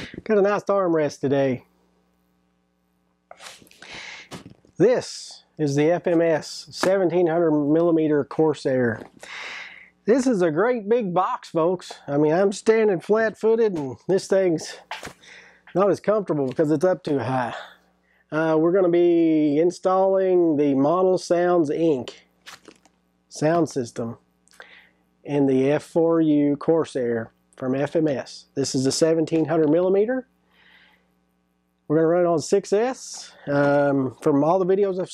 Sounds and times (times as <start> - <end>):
Speech: 0.0 - 1.7, 4.8 - 9.1, 10.1 - 14.9, 15.7 - 22.3, 23.3 - 24.2, 25.3 - 30.3, 31.9 - 35.1.